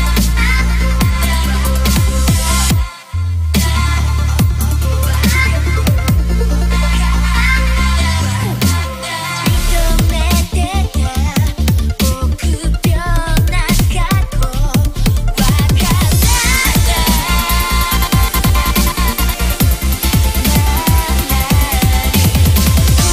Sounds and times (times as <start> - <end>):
Electronic music: 0.0 - 23.1.